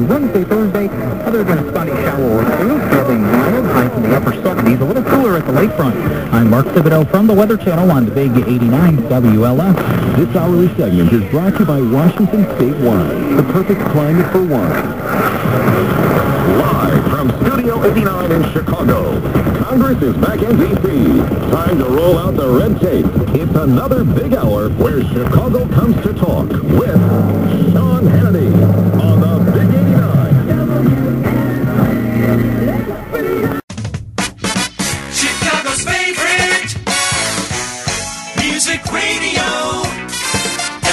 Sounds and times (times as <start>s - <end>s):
Speech: 0.0s - 14.9s, 16.1s - 33.6s
Radio: 0.0s - 33.6s
Music: 0.0s - 40.9s.